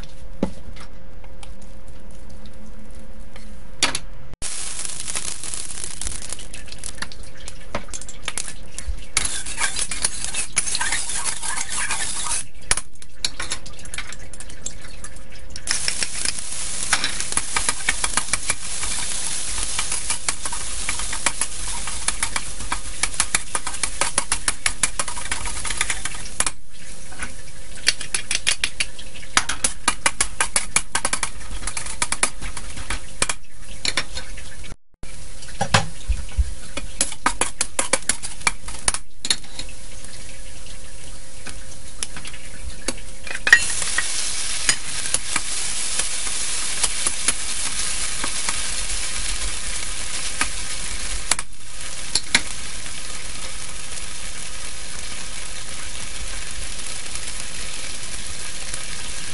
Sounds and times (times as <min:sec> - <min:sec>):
Frying (food): 0:04.4 - 0:59.3.